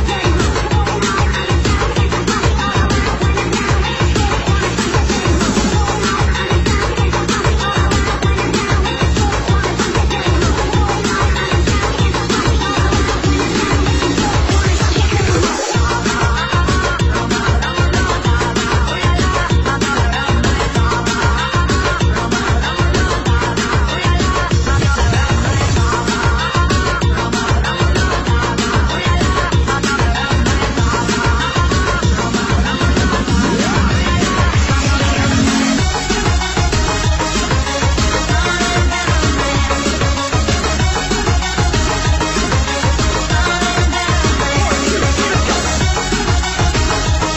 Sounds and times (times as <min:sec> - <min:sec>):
Soundtrack music: 0:00.0 - 0:47.3.